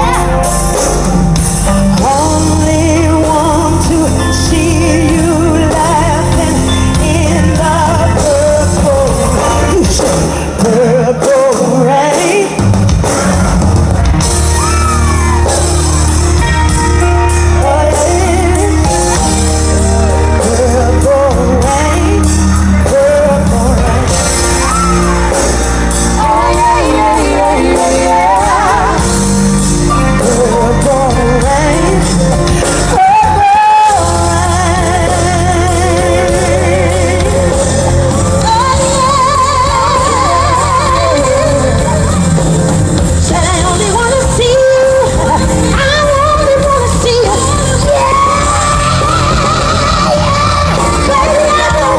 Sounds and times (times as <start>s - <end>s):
Music: 0.0s - 51.9s.